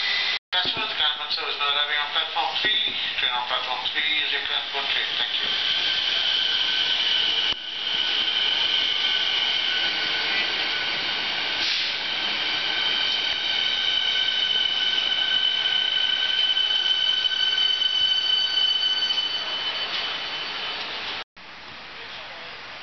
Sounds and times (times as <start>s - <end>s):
Railroad car, train wagon: 0.0s - 22.8s
Subway, metro, underground: 0.0s - 22.8s
Train: 0.0s - 22.8s.